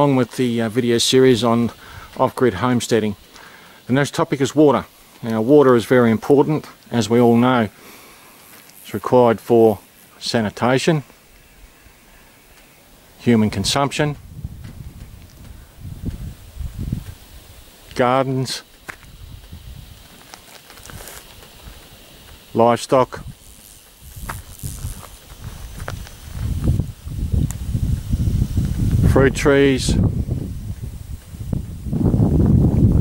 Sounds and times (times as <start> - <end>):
Speech: 0.0 - 3.2, 3.9 - 7.8, 8.8 - 11.1, 13.2 - 14.2, 17.9 - 18.7, 22.5 - 23.3, 29.0 - 30.1.